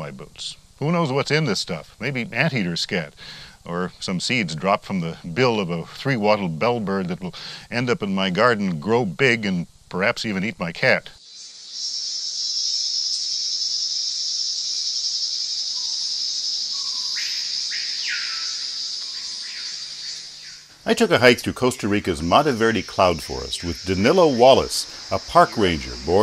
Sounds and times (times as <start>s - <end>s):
Speech: 0.0s - 11.2s, 20.9s - 26.2s.